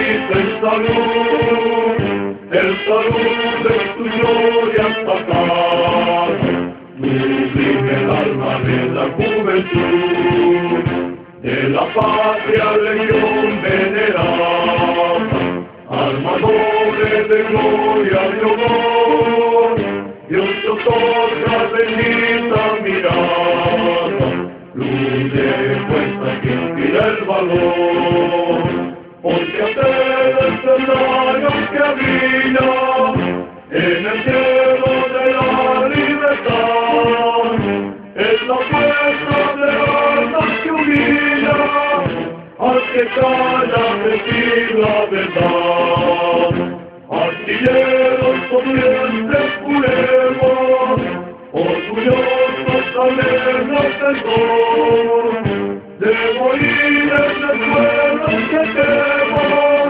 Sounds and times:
Music: 0:00.0 - 0:59.8.

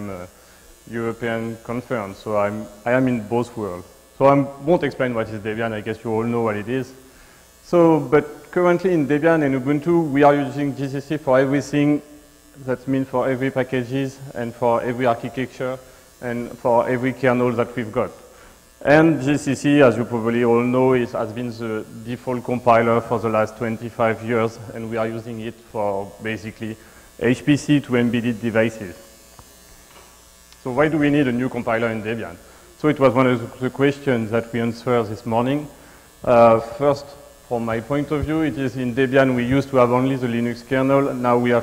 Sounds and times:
Speech: 0:00.0 - 0:00.3, 0:00.9 - 0:07.0, 0:07.6 - 0:18.2, 0:18.8 - 0:29.0, 0:30.6 - 0:41.6.

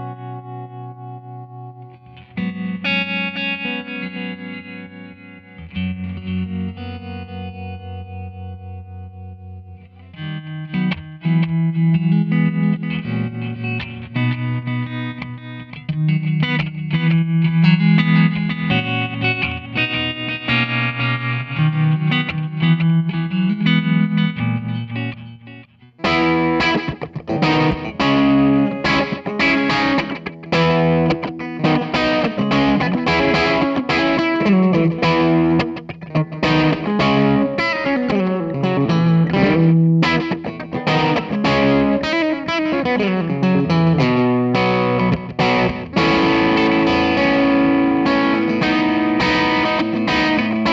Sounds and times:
Music: 0:00.0 - 0:50.7.

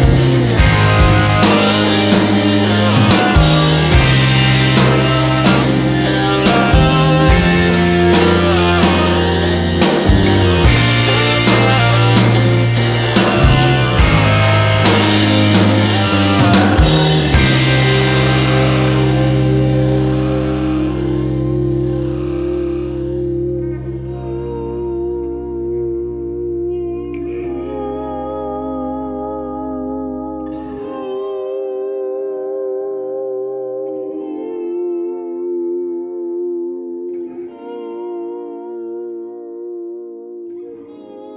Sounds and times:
Music: 0:00.0 - 0:41.3.

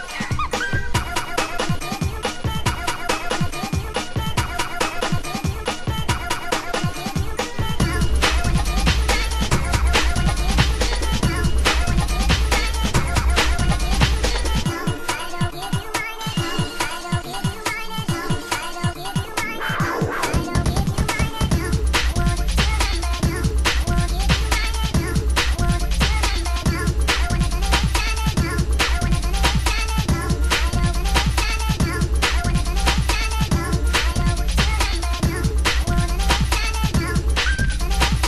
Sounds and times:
Electronic music: 0:00.0 - 0:38.2.

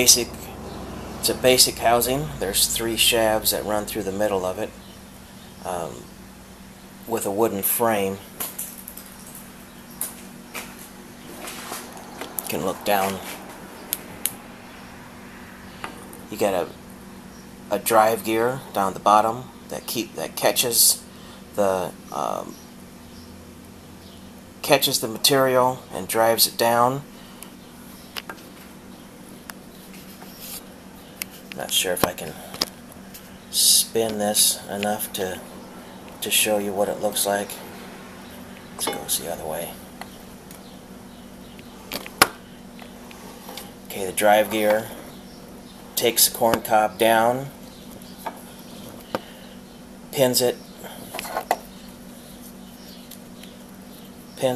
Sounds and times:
Speech: 0:00.0 - 0:00.5, 0:01.2 - 0:04.8, 0:05.6 - 0:06.1, 0:07.1 - 0:08.3, 0:12.5 - 0:13.4, 0:16.3 - 0:16.8, 0:17.7 - 0:22.6, 0:24.6 - 0:27.1, 0:31.6 - 0:32.5, 0:33.6 - 0:35.4, 0:36.2 - 0:37.6, 0:38.8 - 0:39.8, 0:43.9 - 0:45.0, 0:46.0 - 0:47.6, 0:50.2 - 0:50.6.

